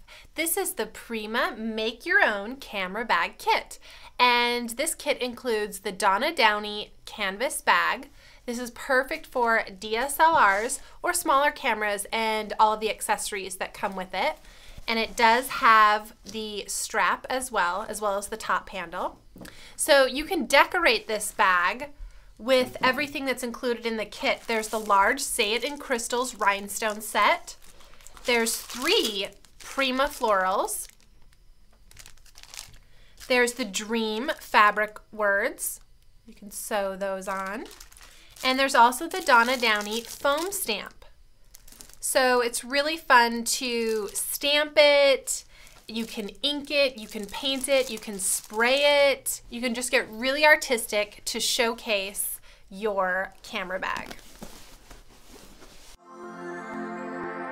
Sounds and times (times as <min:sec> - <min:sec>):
Speech: 0:00.4 - 0:19.2, 0:19.8 - 0:27.6, 0:28.3 - 0:30.9, 0:33.3 - 0:37.7, 0:38.4 - 0:41.1, 0:42.0 - 0:54.2.